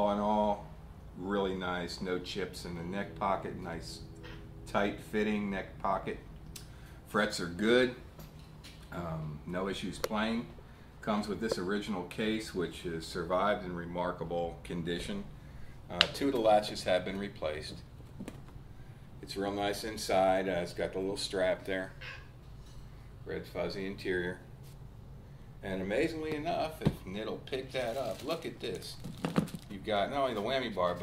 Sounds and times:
Speech: 0.0 - 4.0, 4.7 - 6.3, 7.1 - 8.0, 8.9 - 15.3, 15.9 - 17.9, 19.2 - 22.0, 23.3 - 24.4, 25.6 - 29.0, 29.7 - 31.0.

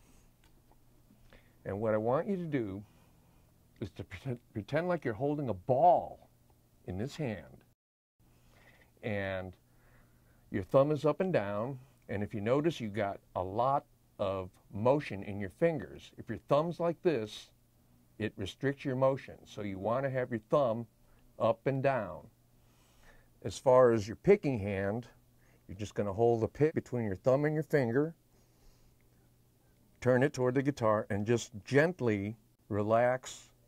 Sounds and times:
Speech: 1.6 - 2.9, 3.8 - 6.3, 6.9 - 7.7, 9.0 - 9.6, 10.5 - 17.6, 18.2 - 22.3, 23.4 - 28.2, 30.0 - 33.6.

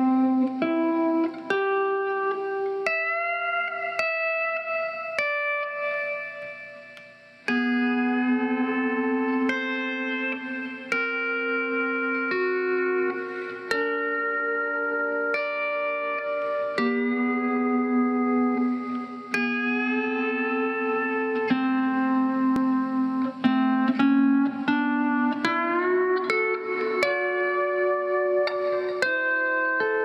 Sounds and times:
Strum: 0.0 - 30.0.

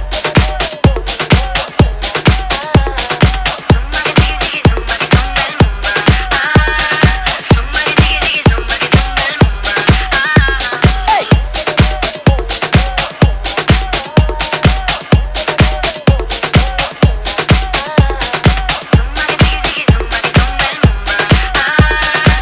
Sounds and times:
Techno: 0.0 - 22.4.

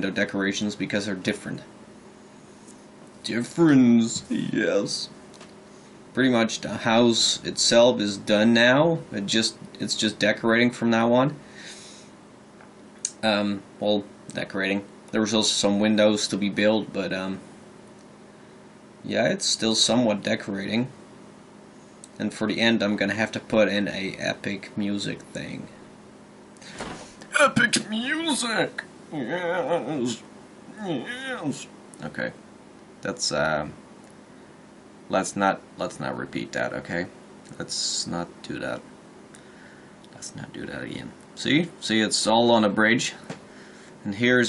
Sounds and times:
Speech: 0.0 - 1.7, 3.2 - 5.2, 6.2 - 11.4, 13.1 - 17.4, 19.0 - 21.0, 22.2 - 25.8, 27.3 - 32.4, 33.0 - 33.8, 35.1 - 38.8, 40.1 - 43.3, 44.0 - 44.4
Inside, small room: 0.0 - 44.4.

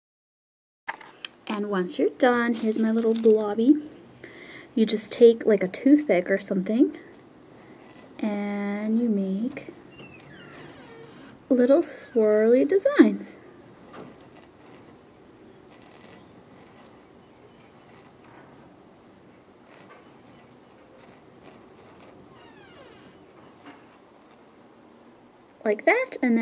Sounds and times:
Speech: 1.5 - 3.8, 4.8 - 7.0, 8.2 - 9.8, 11.5 - 13.4, 25.6 - 26.4.

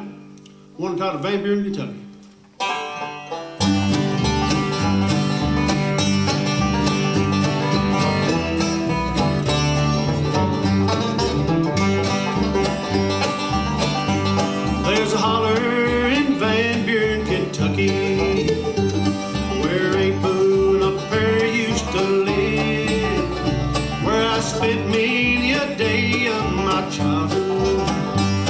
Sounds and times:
Bluegrass: 0.0 - 28.4.

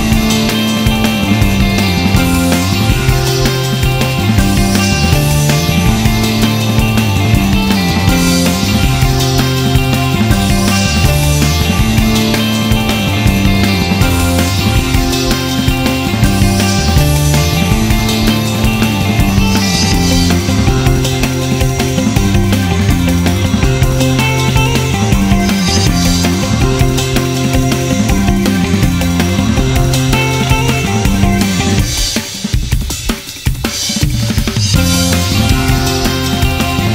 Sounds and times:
Music: 0.0 - 36.9.

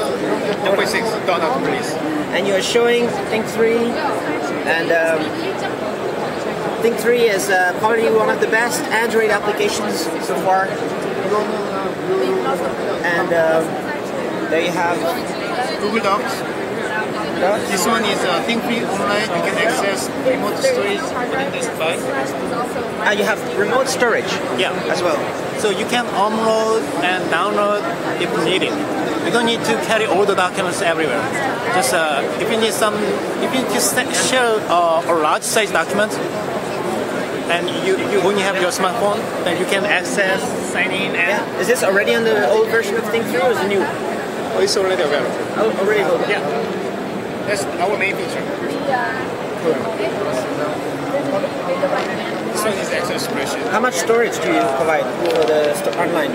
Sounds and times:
Speech: 0.0 - 46.7, 47.4 - 56.3.

